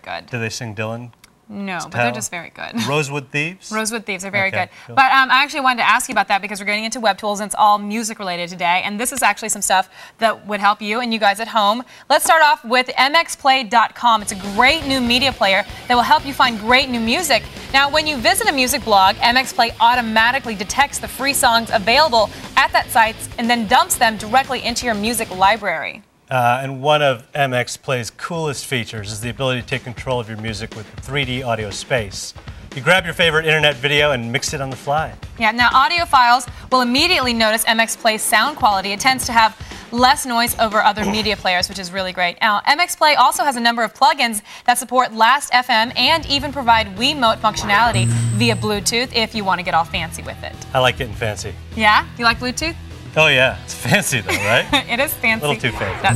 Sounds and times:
Speech: 0:00.0 - 0:06.5, 0:16.0 - 0:56.1.

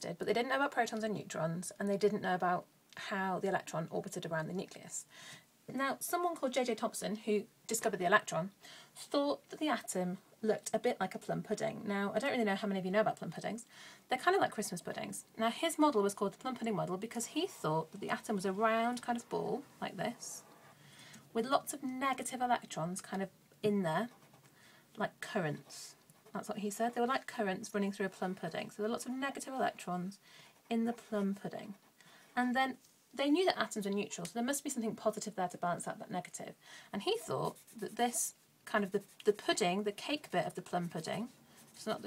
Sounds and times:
Speech: 0:00.0 - 0:05.1, 0:05.7 - 0:20.4, 0:21.3 - 0:24.1, 0:25.0 - 0:31.8, 0:32.4 - 0:42.0.

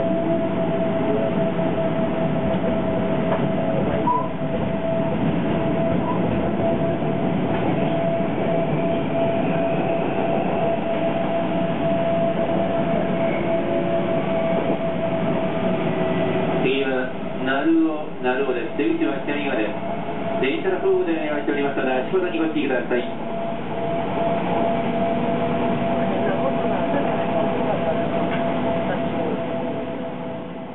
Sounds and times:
Speech: 0:16.6 - 0:19.8, 0:20.4 - 0:23.2, 0:26.0 - 0:28.0.

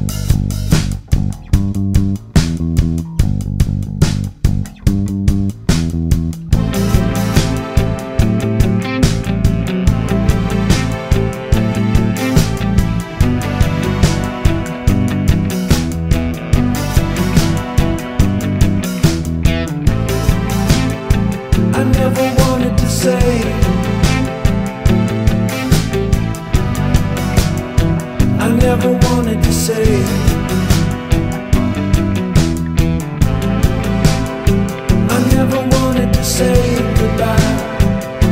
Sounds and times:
Music: 0:00.0 - 0:38.3.

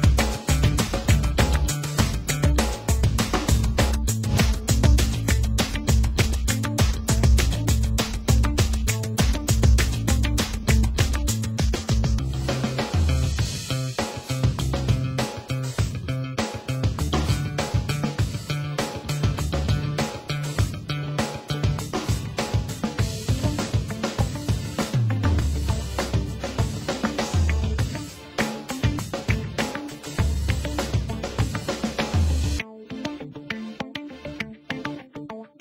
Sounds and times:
Music: 0:00.0 - 0:35.6.

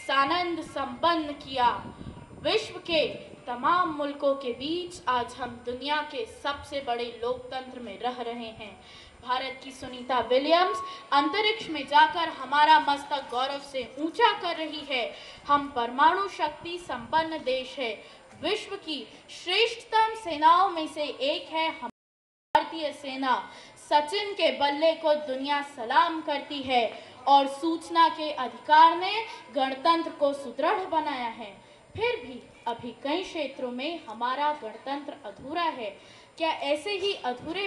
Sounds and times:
Child speech, kid speaking: 0:00.0 - 0:21.9, 0:22.6 - 0:37.6
Female speech, woman speaking: 0:00.0 - 0:21.9, 0:22.6 - 0:37.6
Narration, monologue: 0:00.0 - 0:21.9, 0:22.6 - 0:37.6.

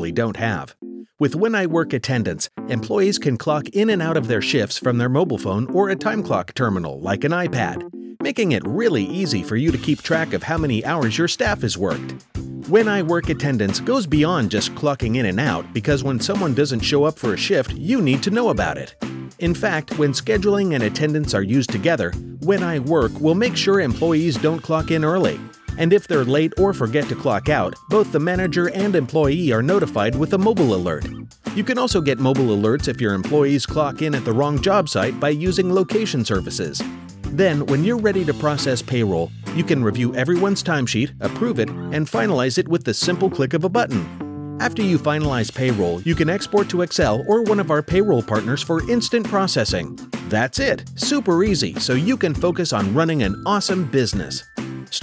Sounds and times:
Music: 0:00.0 - 0:55.0
Speech: 0:00.0 - 0:55.0.

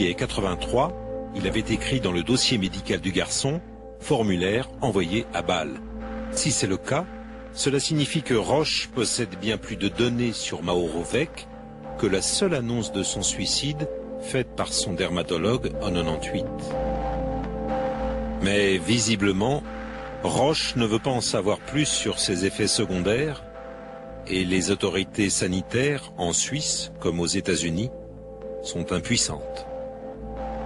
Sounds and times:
Speech: 0:00.0 - 0:05.8, 0:06.4 - 0:16.7, 0:18.4 - 0:23.5, 0:24.3 - 0:28.0, 0:28.6 - 0:29.7
Music: 0:00.0 - 0:30.6.

